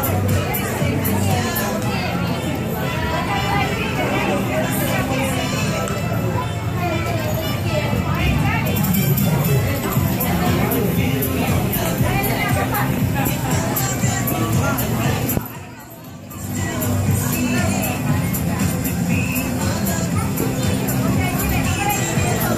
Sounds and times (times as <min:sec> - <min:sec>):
Crowd: 0:00.0 - 0:22.5
Music: 0:00.0 - 0:22.5
Speech: 0:00.0 - 0:22.5.